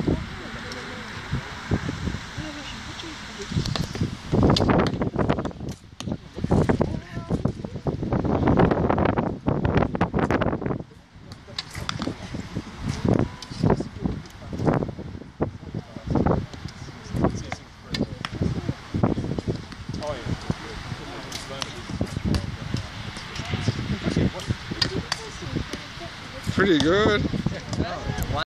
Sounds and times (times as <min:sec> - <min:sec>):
Speech: 0:00.0 - 0:01.3, 0:02.3 - 0:04.0, 0:20.0 - 0:28.4.